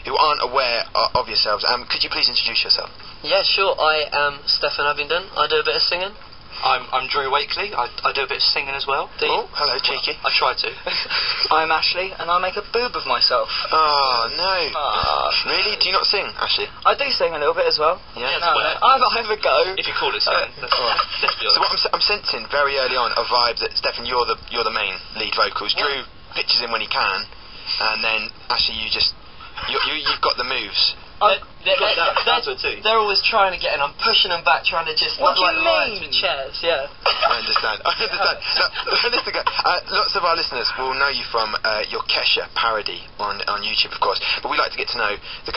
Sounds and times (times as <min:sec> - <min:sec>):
Speech: 0:00.0 - 0:10.8, 0:11.5 - 0:45.5
Radio: 0:05.6 - 0:16.8, 0:17.5 - 0:42.2, 0:43.4 - 0:45.5.